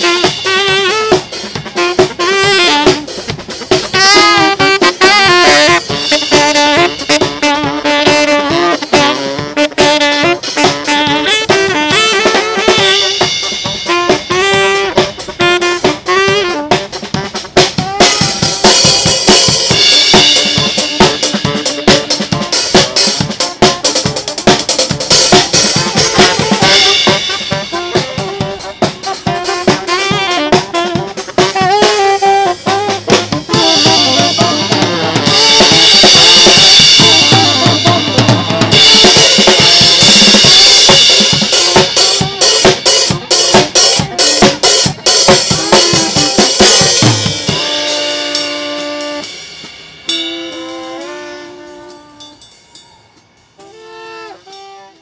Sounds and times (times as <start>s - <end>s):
Music: 0.0s - 55.0s.